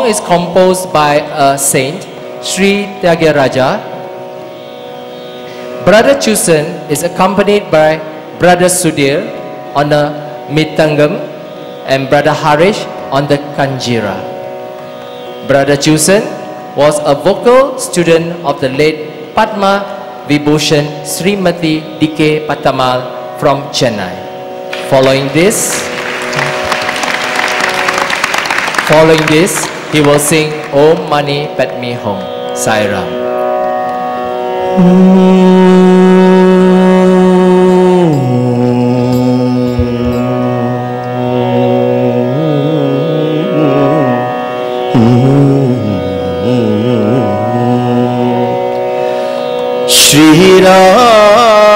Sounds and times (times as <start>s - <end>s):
Speech: 0.0s - 3.8s, 5.9s - 11.2s, 15.5s - 24.2s, 24.9s - 25.8s, 28.8s - 33.2s
Music: 0.0s - 51.7s.